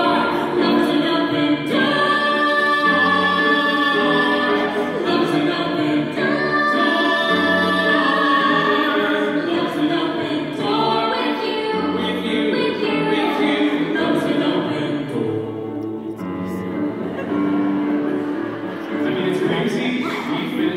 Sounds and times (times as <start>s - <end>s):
Music: 0.0s - 20.7s.